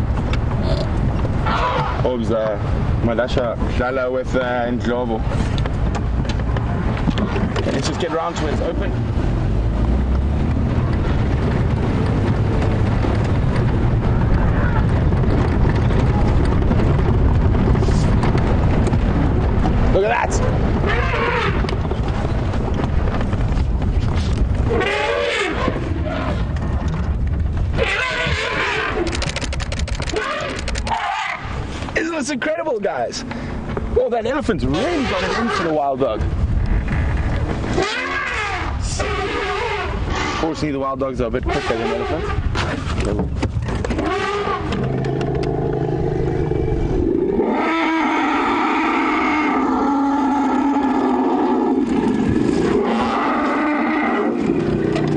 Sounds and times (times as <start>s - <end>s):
Outside, rural or natural: 0.0s - 55.1s
Roar: 24.7s - 26.5s, 27.8s - 29.1s, 37.7s - 40.6s, 43.9s - 55.1s.